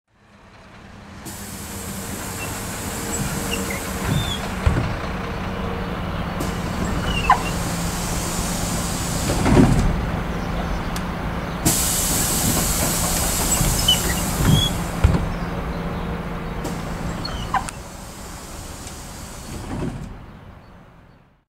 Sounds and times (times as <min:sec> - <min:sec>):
Sliding door: 0:01.3 - 0:20.4.